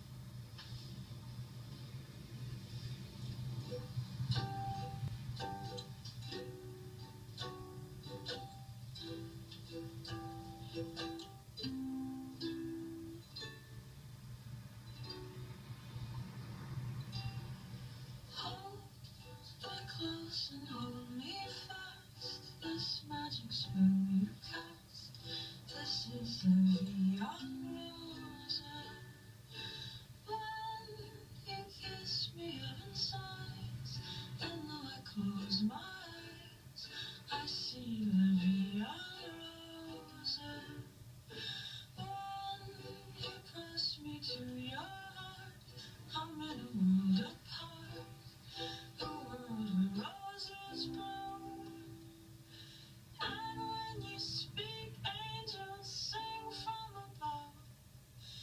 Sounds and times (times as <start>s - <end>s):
Inside, small room: 0.0s - 58.4s
Music: 0.0s - 58.4s.